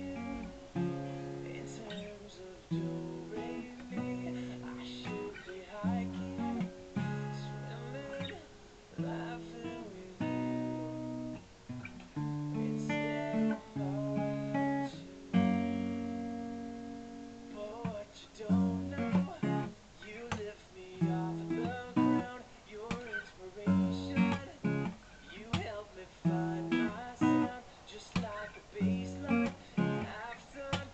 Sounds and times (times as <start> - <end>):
Acoustic guitar: 0.0 - 30.9.